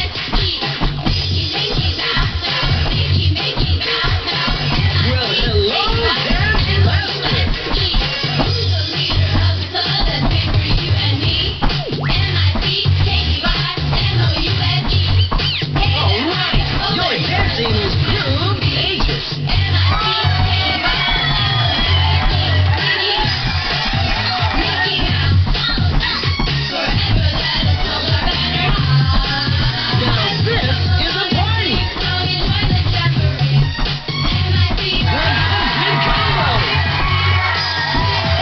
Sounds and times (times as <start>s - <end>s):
Music: 0.0s - 38.4s
Speech: 5.0s - 7.2s, 15.9s - 19.0s, 30.0s - 31.8s.